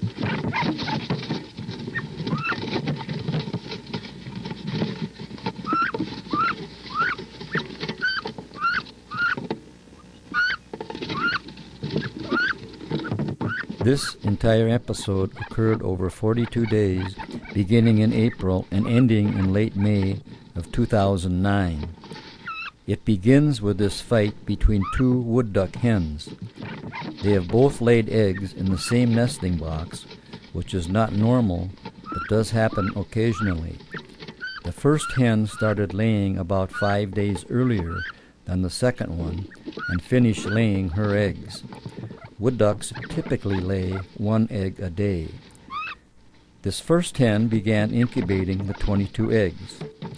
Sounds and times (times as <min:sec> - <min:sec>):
Speech: 0:13.8 - 0:22.0, 0:22.9 - 0:26.4, 0:27.2 - 0:33.8, 0:34.6 - 0:41.6, 0:42.4 - 0:45.4, 0:46.6 - 0:49.8.